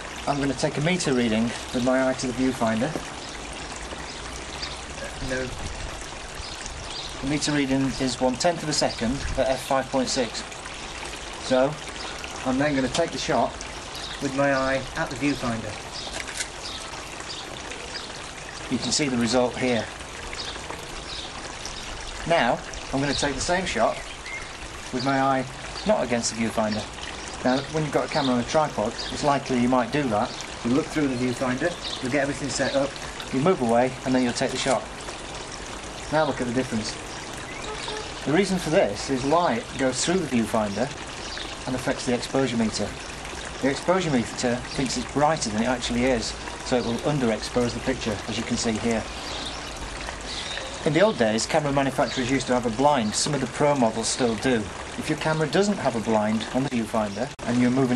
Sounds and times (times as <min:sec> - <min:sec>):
Speech: 0:00.3 - 0:03.0, 0:05.0 - 0:05.6, 0:07.2 - 0:10.5, 0:11.4 - 0:11.8, 0:12.4 - 0:13.6, 0:14.2 - 0:15.8, 0:18.7 - 0:19.9, 0:22.2 - 0:24.0, 0:24.9 - 0:34.9, 0:36.1 - 0:37.0, 0:38.2 - 0:41.0, 0:41.7 - 0:43.0, 0:43.6 - 0:49.1, 0:50.8 - 0:57.9.